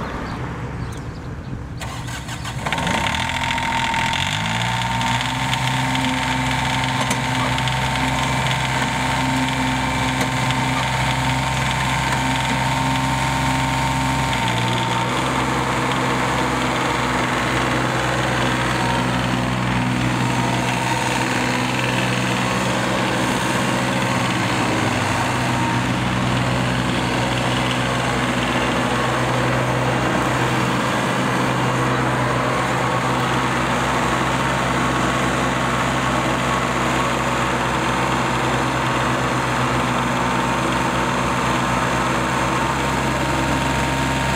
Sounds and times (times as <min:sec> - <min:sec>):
Vehicle: 0:00.0 - 0:44.3
Lawn mower: 0:01.8 - 0:44.3.